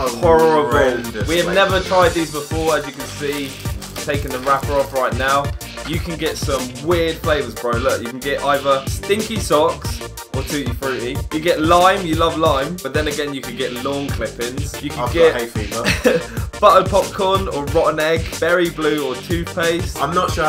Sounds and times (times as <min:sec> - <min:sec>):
Speech: 0:00.0 - 0:15.9, 0:16.6 - 0:20.4
Music: 0:00.0 - 0:20.4.